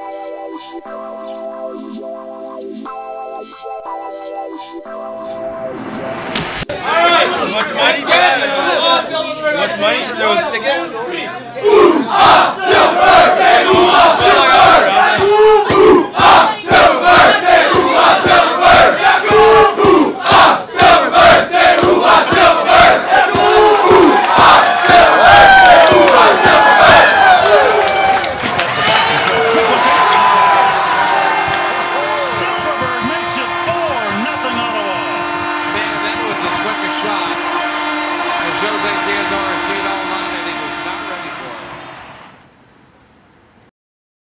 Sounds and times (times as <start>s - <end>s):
Speech: 32.1s - 35.1s, 35.7s - 37.4s, 38.4s - 41.6s.